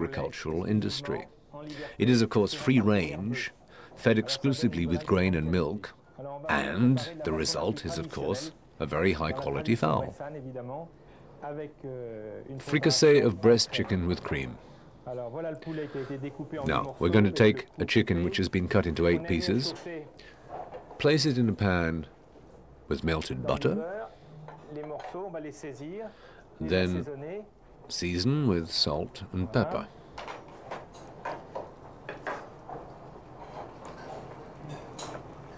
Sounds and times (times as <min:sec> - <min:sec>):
Speech: 0:00.0 - 0:20.2, 0:21.0 - 0:22.1, 0:22.9 - 0:30.0.